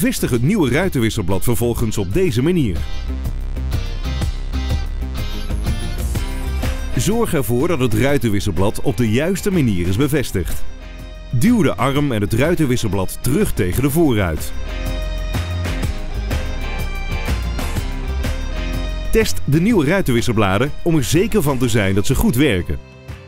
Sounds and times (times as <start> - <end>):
Speech: 0.0 - 2.9, 6.9 - 10.7, 11.4 - 14.6, 19.1 - 22.8
Music: 0.0 - 23.2.